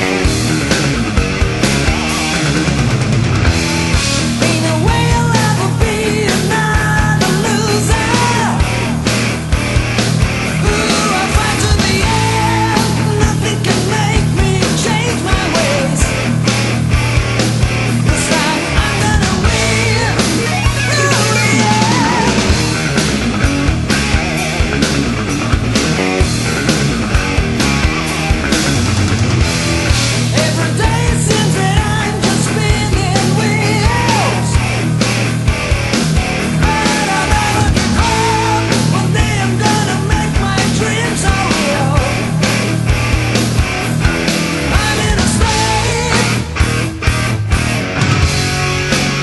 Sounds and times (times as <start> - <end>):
Music: 0.0 - 49.2.